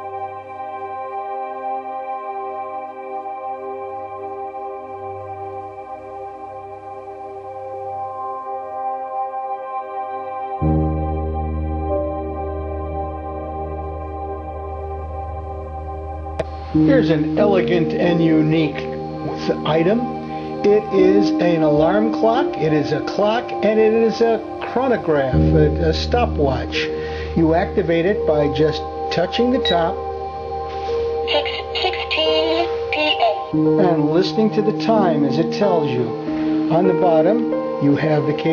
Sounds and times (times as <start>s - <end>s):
New-age music: 0.0s - 38.5s
Speech: 16.8s - 30.0s, 31.3s - 38.5s.